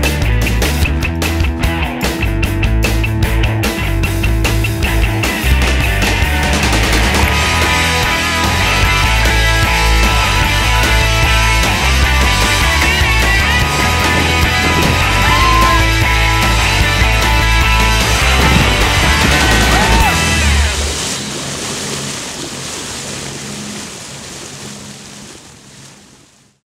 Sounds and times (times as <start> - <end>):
Music: 0.0 - 21.4.